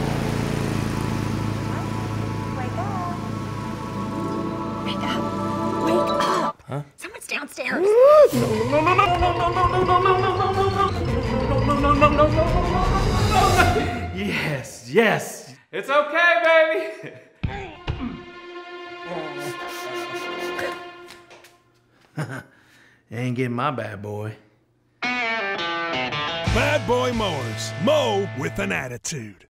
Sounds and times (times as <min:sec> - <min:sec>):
Music: 0:01.7 - 0:06.5, 0:08.3 - 0:14.2, 0:17.4 - 0:21.7, 0:25.0 - 0:28.8
Speech: 0:26.6 - 0:29.5.